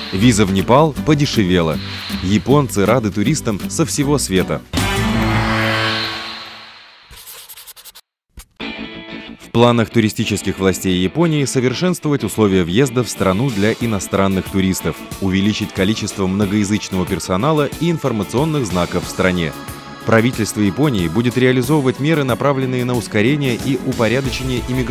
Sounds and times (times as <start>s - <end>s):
Music: 0.0s - 6.5s, 8.4s - 24.9s
Speech: 0.1s - 4.7s, 9.4s - 24.9s.